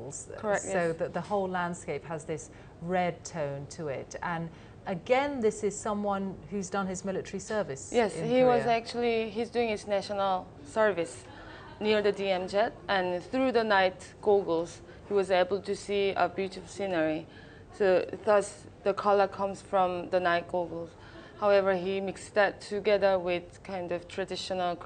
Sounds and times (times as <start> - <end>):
Female speech, woman speaking: 0.0 - 24.8.